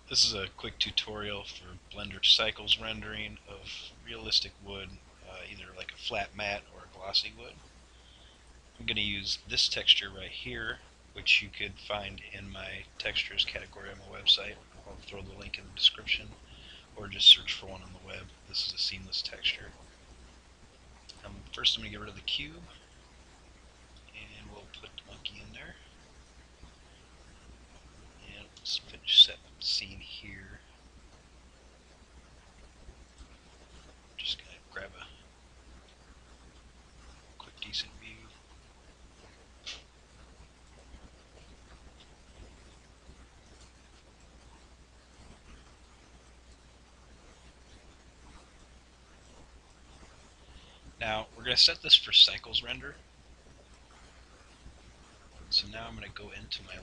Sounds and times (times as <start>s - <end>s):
Speech: 0.1s - 7.6s, 8.8s - 19.8s, 21.1s - 22.8s, 24.1s - 25.8s, 28.2s - 30.6s, 34.2s - 35.2s, 37.4s - 38.4s, 51.0s - 53.0s, 55.5s - 56.8s.